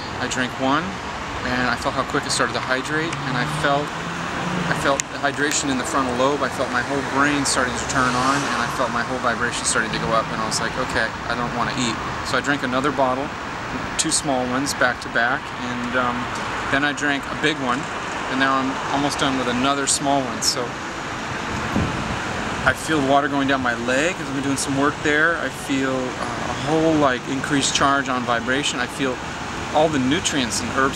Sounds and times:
Speech: 0:00.0 - 0:03.9, 0:04.7 - 0:20.8, 0:22.6 - 0:30.9
Waterfall: 0:00.0 - 0:30.9.

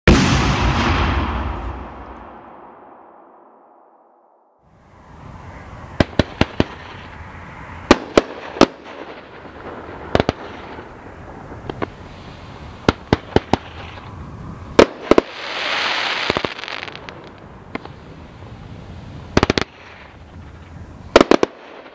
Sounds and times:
Firecracker: 0:04.7 - 0:21.9.

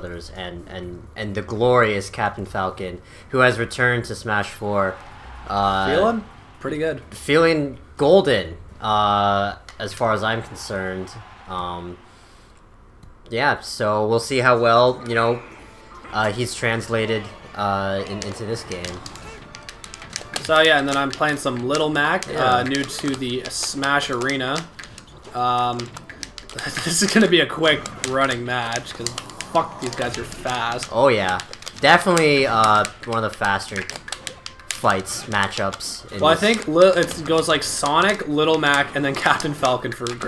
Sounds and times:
Speech: 0:00.0 - 0:12.0, 0:13.3 - 0:19.4, 0:20.3 - 0:24.7, 0:25.3 - 0:25.9, 0:26.6 - 0:33.9, 0:34.8 - 0:40.2.

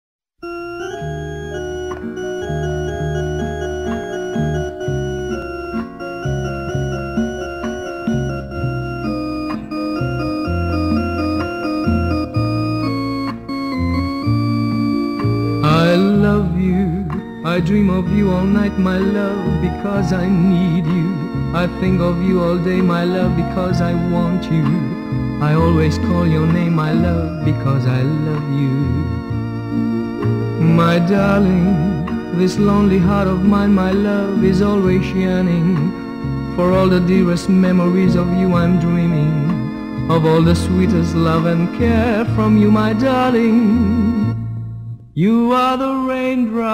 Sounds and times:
Music: 0:00.4 - 0:46.7.

